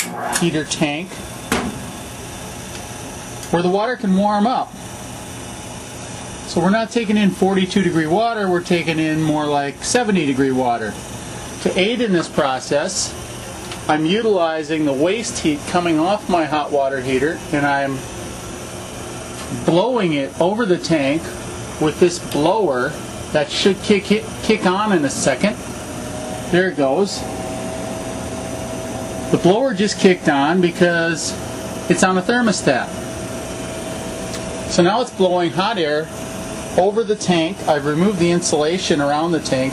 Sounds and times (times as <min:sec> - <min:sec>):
Speech: 0:00.4 - 0:01.2, 0:03.5 - 0:04.8, 0:06.5 - 0:11.0, 0:11.6 - 0:13.2, 0:13.9 - 0:18.0, 0:19.5 - 0:25.6, 0:26.5 - 0:27.3, 0:29.3 - 0:33.0, 0:34.7 - 0:36.1, 0:36.8 - 0:39.7.